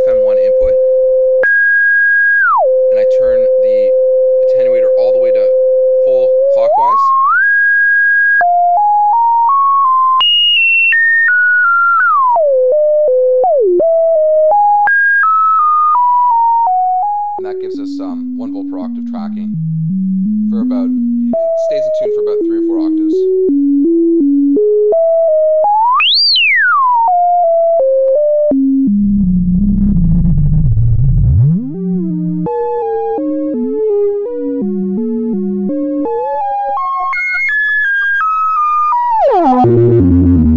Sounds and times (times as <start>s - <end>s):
Synthesizer: 0.0s - 40.5s.